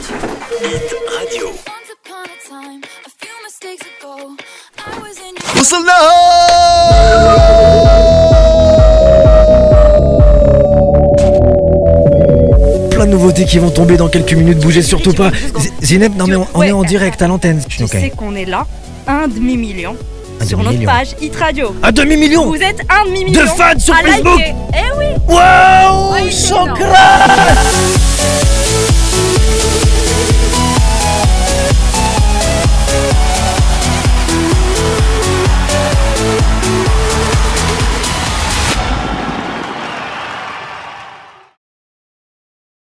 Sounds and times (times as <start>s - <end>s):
Music: 0.5s - 39.6s.